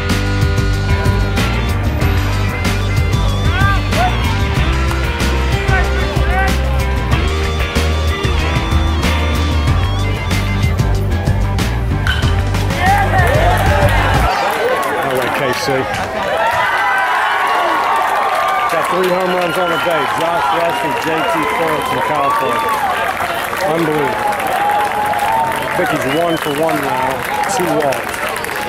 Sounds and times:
Music: 0.0s - 14.3s.

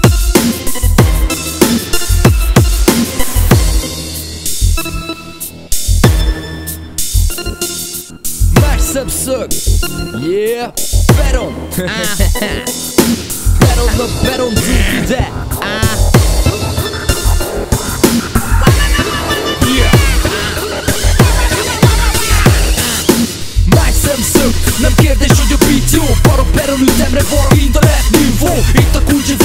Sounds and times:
Music: 0.0s - 29.4s.

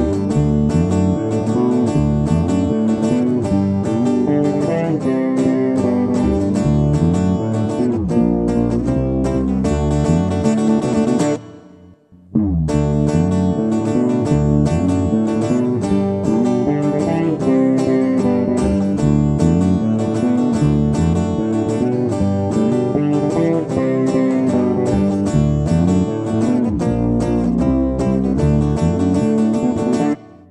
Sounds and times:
Bass guitar: 0.0s - 30.5s
Strum: 0.0s - 30.5s.

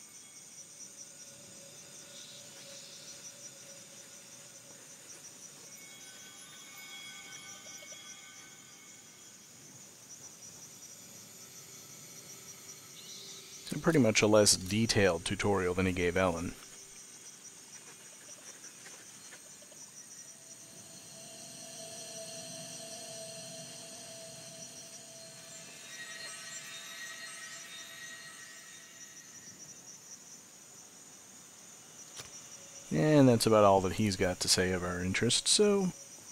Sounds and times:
Outside, rural or natural: 0.0s - 36.3s
Speech: 13.7s - 16.6s, 32.9s - 36.0s.

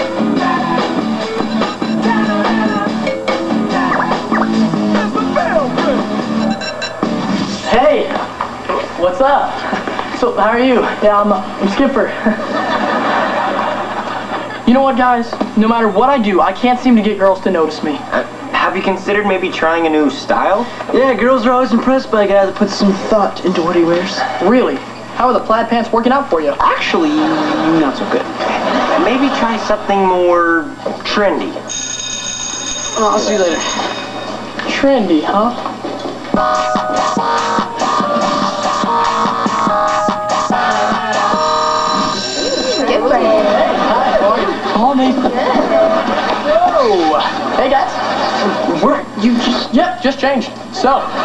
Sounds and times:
Speech: 14.7s - 28.3s, 29.0s - 31.6s, 34.7s - 35.6s, 43.0s - 51.2s.

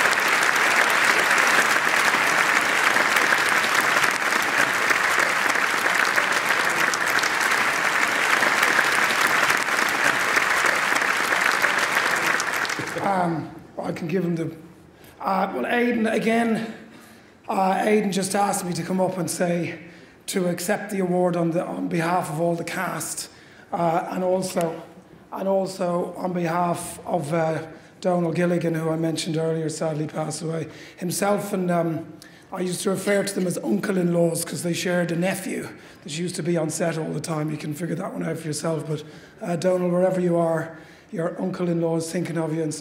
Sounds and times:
Speech: 12.9s - 16.9s, 17.5s - 42.8s.

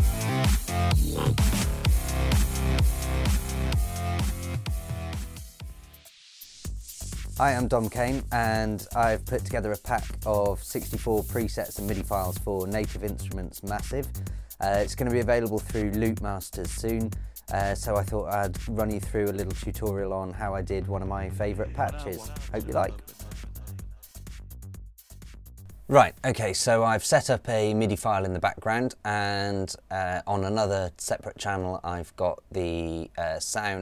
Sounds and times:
Music: 0.0s - 27.3s
Speech: 7.4s - 23.0s, 25.9s - 33.8s.

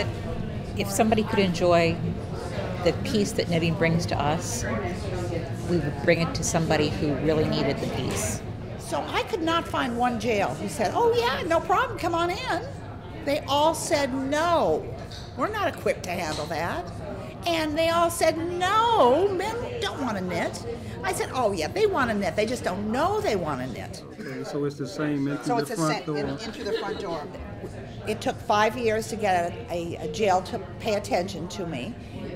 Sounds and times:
Speech: 13.3s - 27.4s.

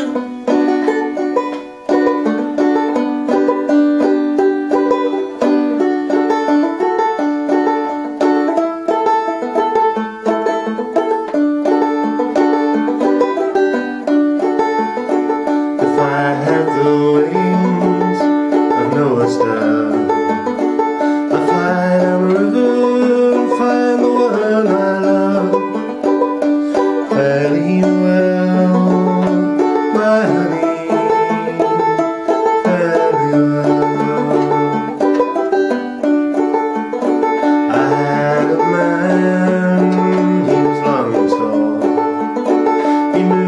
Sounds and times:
Banjo: 0.0s - 43.4s.

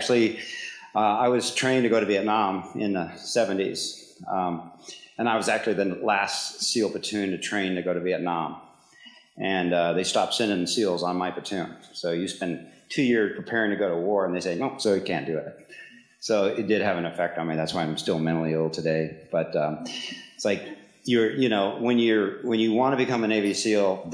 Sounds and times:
Speech: 0.0s - 8.6s, 9.4s - 24.1s.

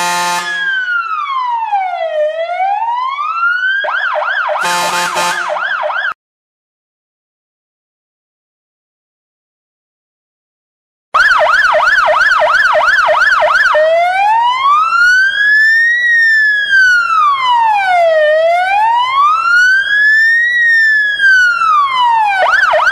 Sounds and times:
Ambulance (siren): 0.0s - 6.2s, 11.2s - 22.9s
Police car (siren): 0.0s - 6.2s, 11.2s - 22.9s.

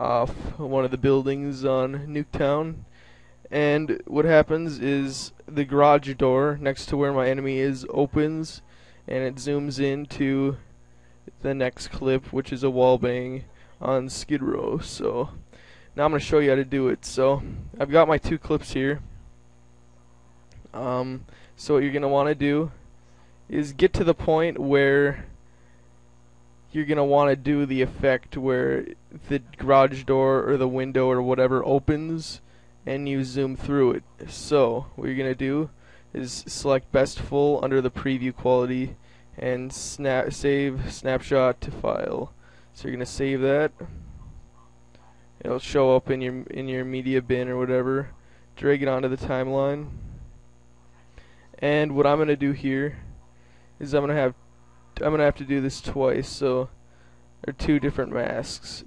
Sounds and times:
Speech: 0.0s - 10.7s, 11.3s - 19.3s, 20.2s - 22.8s, 23.5s - 25.4s, 26.7s - 44.0s, 45.4s - 50.1s, 51.5s - 53.2s, 53.8s - 56.8s, 57.4s - 58.8s.

